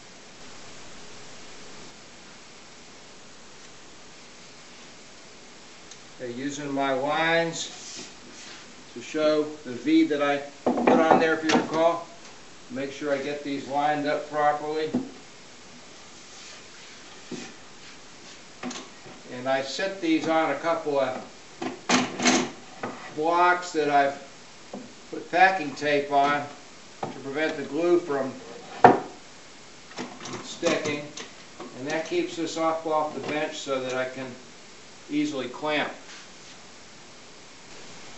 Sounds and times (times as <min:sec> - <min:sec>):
Speech: 0:06.2 - 0:07.8, 0:08.9 - 0:12.1, 0:12.7 - 0:15.0, 0:19.3 - 0:21.3, 0:23.2 - 0:24.3, 0:25.2 - 0:28.4, 0:30.4 - 0:31.2, 0:31.8 - 0:34.4, 0:35.1 - 0:36.0.